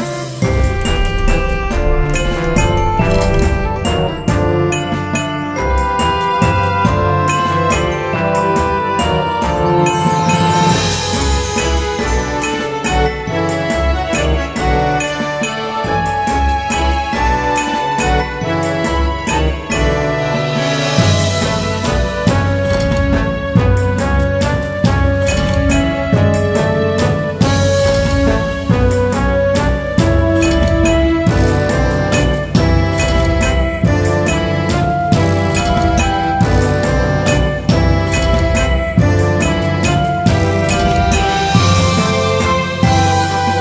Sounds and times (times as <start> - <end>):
Background music: 0.0 - 43.6.